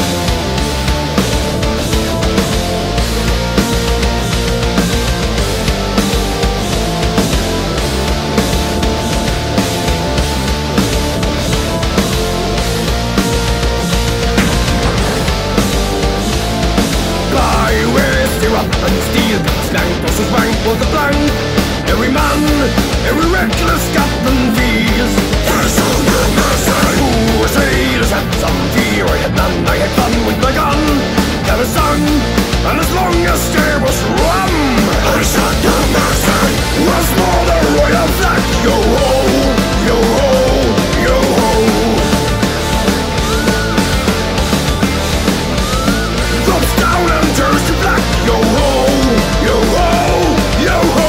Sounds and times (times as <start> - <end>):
Music: 0.0 - 51.0.